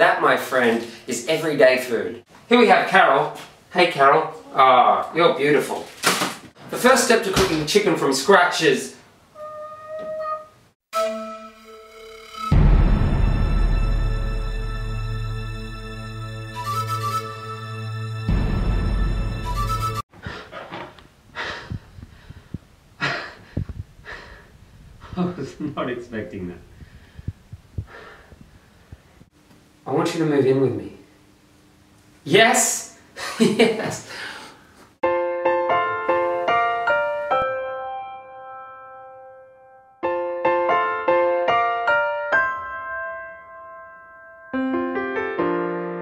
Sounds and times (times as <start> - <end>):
Speech: 0.0 - 5.9, 6.7 - 9.0, 25.2 - 26.6, 29.9 - 31.1, 32.2 - 33.0, 33.6 - 34.1.